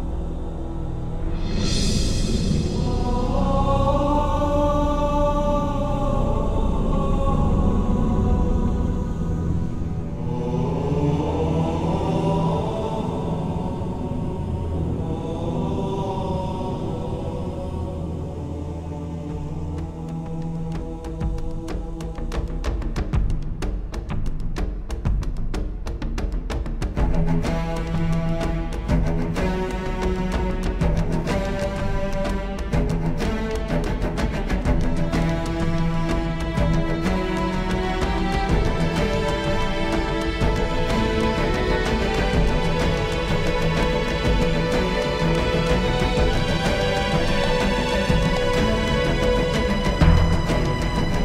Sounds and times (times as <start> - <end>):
Music: 0.0 - 51.2.